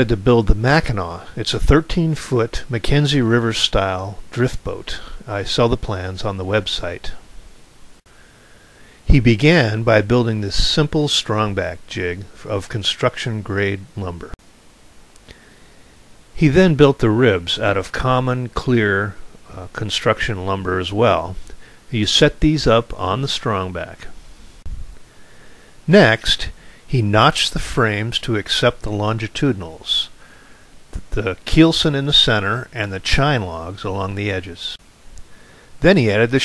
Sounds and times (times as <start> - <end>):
Speech: 0.0 - 7.2, 9.1 - 14.4, 16.4 - 24.2, 25.9 - 30.2, 31.0 - 34.8, 35.8 - 36.4.